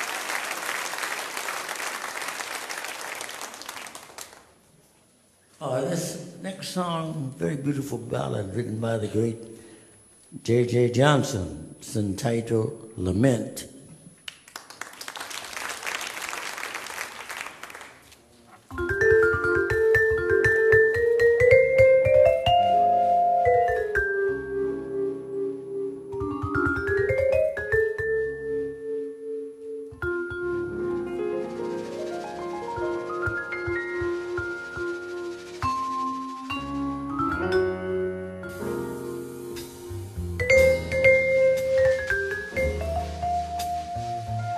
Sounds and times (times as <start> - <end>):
Inside, large room or hall: 0.0 - 44.5
Marimba, xylophone: 18.7 - 25.1, 26.1 - 31.1, 32.4 - 44.5
Vibraphone: 18.7 - 31.0, 35.7 - 44.4.